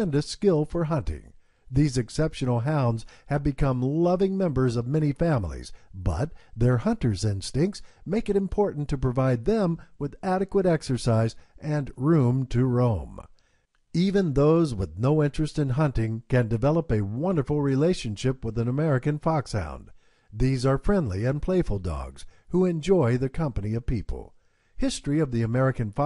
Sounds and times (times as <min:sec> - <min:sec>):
Speech: 0:00.0 - 0:13.3, 0:14.0 - 0:26.0.